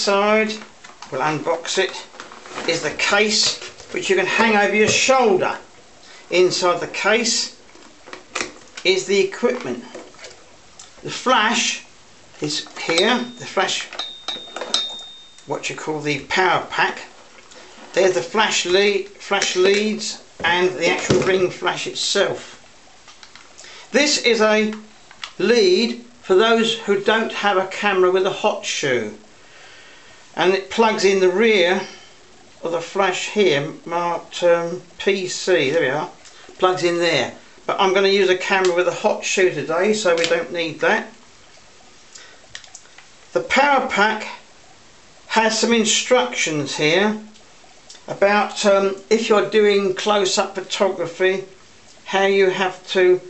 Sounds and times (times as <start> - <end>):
Speech: 0.0 - 5.7, 6.3 - 7.6, 8.8 - 10.0, 11.0 - 14.0, 15.5 - 17.2, 18.0 - 22.6, 23.9 - 29.2, 30.4 - 32.0, 32.6 - 41.2, 43.3 - 44.5, 45.3 - 47.4, 48.0 - 53.2.